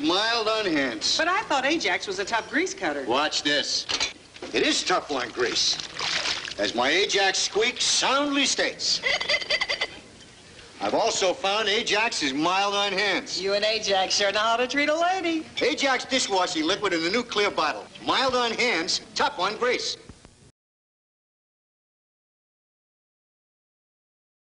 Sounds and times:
Speech: 0:04.5 - 0:05.8, 0:06.6 - 0:09.0, 0:10.8 - 0:20.1.

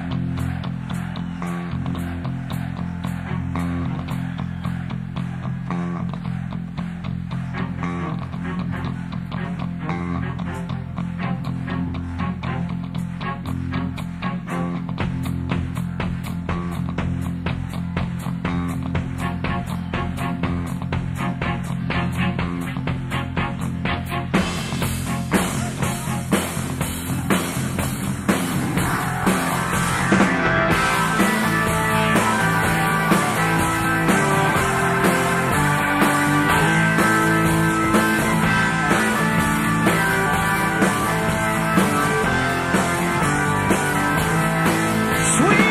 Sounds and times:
Music: 0:00.0 - 0:45.7.

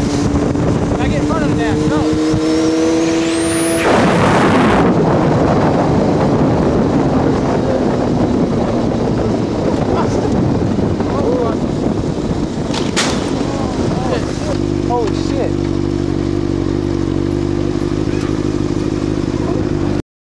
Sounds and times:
Vehicle: 0:00.0 - 0:20.0.

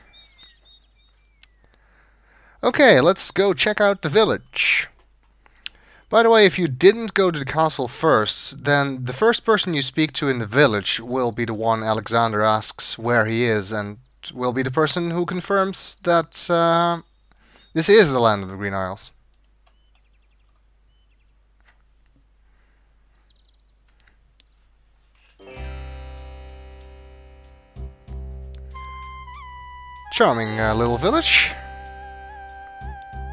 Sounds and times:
Outside, rural or natural: 0:00.0 - 0:33.3
Speech: 0:02.6 - 0:05.0, 0:06.1 - 0:17.0, 0:17.8 - 0:19.2, 0:30.1 - 0:31.6.

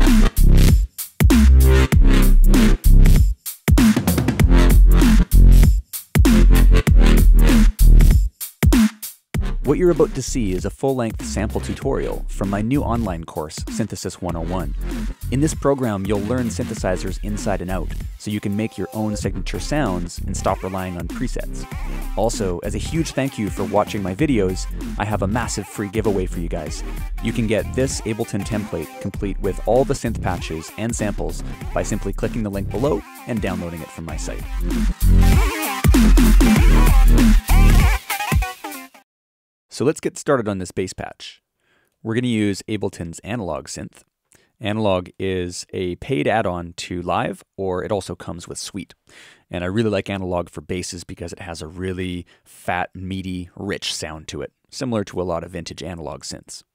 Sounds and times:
Music: 0:00.0 - 0:39.0
Speech: 0:09.6 - 0:34.4, 0:39.7 - 0:41.4, 0:42.0 - 0:44.0, 0:44.6 - 0:56.7.

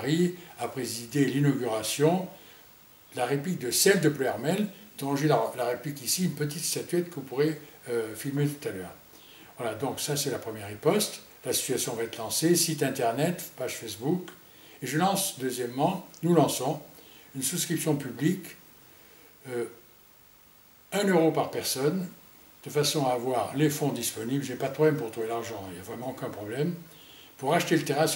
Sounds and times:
Speech: 0:00.0 - 0:02.4, 0:03.1 - 0:09.0, 0:09.6 - 0:18.6, 0:19.4 - 0:19.8, 0:20.9 - 0:28.1
Inside, small room: 0:00.0 - 0:28.1.

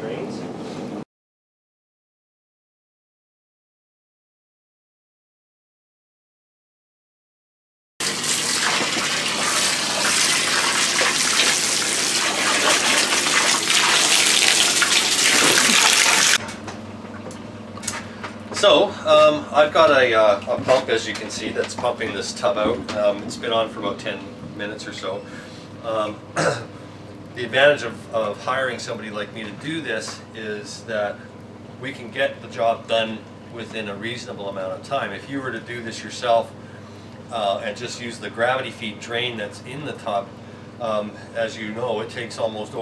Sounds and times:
Liquid: 0:08.0 - 0:16.4, 0:30.4 - 0:34.6.

